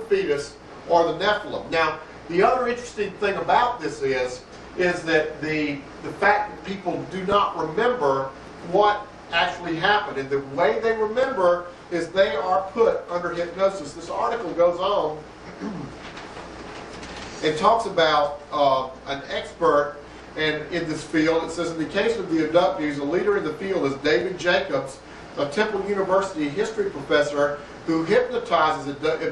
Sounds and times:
Speech: 0.0s - 15.9s, 17.4s - 29.3s.

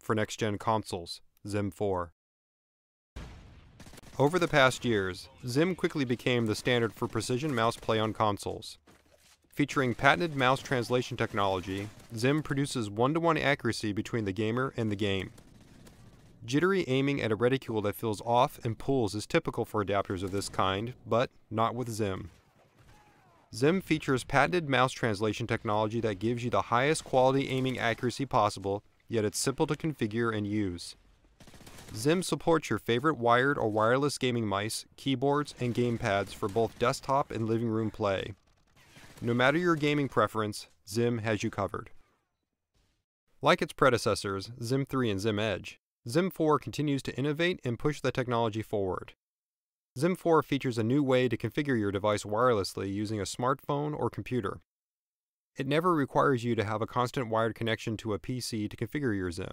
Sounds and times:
Speech: 0.0s - 2.2s, 4.2s - 8.8s, 9.6s - 15.3s, 16.5s - 22.3s, 22.9s - 31.0s, 32.0s - 38.4s, 39.2s - 42.0s, 43.4s - 49.2s, 50.0s - 54.6s, 55.6s - 59.5s.

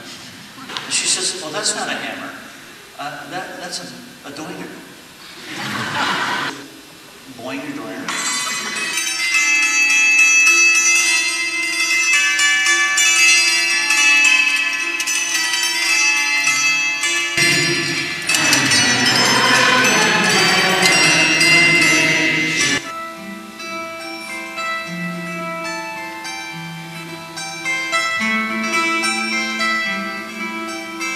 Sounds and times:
Harp: 8.1s - 31.1s
Pizzicato: 17.4s - 22.9s.

